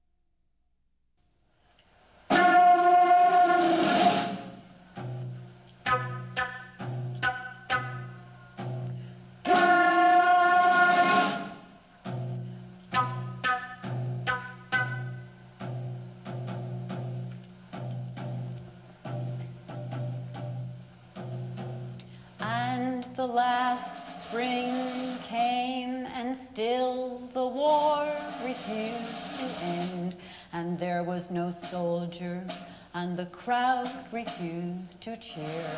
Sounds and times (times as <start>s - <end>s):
Percussion: 27.5s - 35.7s.